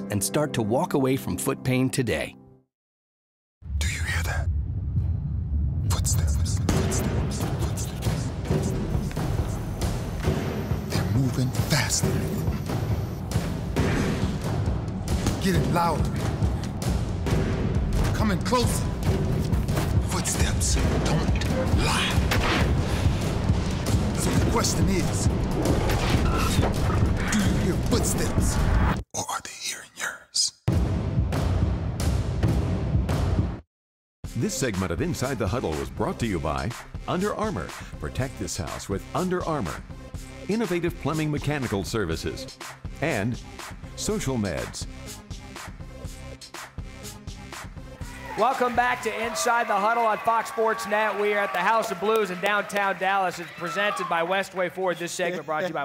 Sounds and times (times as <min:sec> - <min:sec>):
Speech: 0:00.0 - 0:02.4, 0:05.9 - 0:08.3, 0:15.4 - 0:16.2, 0:18.2 - 0:18.8, 0:24.2 - 0:25.3, 0:27.3 - 0:28.6, 0:34.4 - 0:39.8, 0:40.5 - 0:43.4, 0:44.0 - 0:44.9, 0:48.4 - 0:55.8
Music: 0:00.0 - 0:02.7, 0:03.8 - 0:29.0, 0:30.7 - 0:55.8.